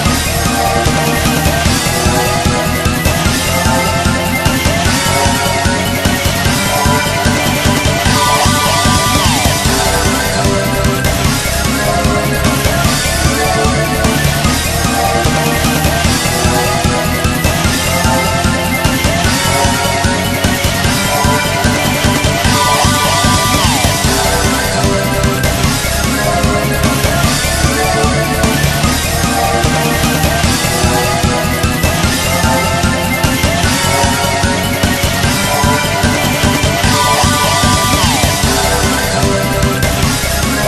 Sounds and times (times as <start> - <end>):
Video game music: 0.0 - 40.6.